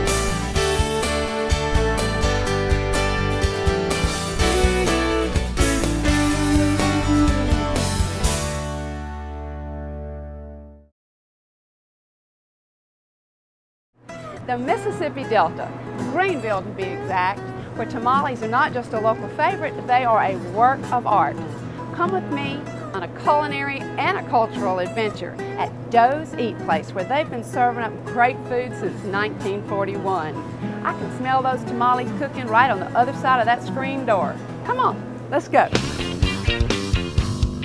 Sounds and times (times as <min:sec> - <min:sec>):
Music: 0:00.0 - 0:10.9, 0:14.0 - 0:37.6
Speech: 0:14.5 - 0:35.8.